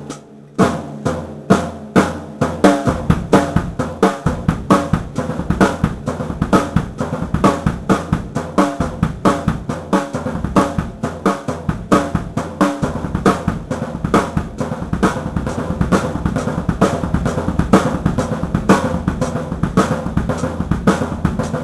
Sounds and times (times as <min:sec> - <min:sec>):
Drum kit: 0:00.0 - 0:21.6
Snare drum: 0:00.0 - 0:21.6.